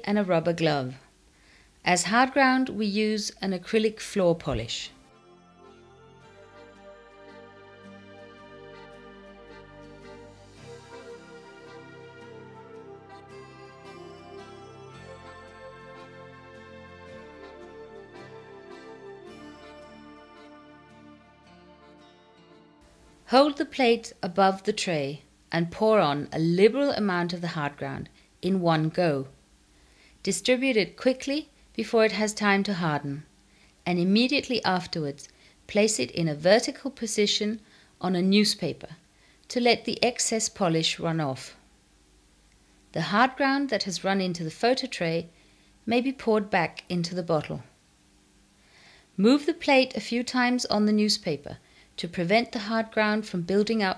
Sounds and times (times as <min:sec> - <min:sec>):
Speech: 0:00.0 - 0:01.1, 0:01.8 - 0:05.0, 0:23.3 - 0:29.4, 0:30.2 - 0:33.3, 0:33.9 - 0:41.6, 0:43.0 - 0:45.3, 0:45.9 - 0:47.7, 0:49.2 - 0:53.9
Music: 0:03.6 - 0:24.7, 0:52.4 - 0:53.9.